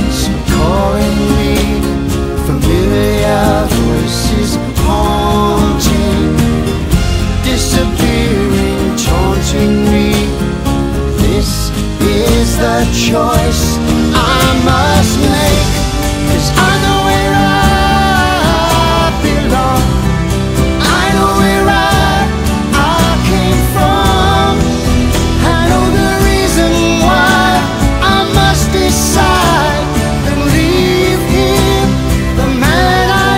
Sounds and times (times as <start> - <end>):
Music: 0.0 - 33.3.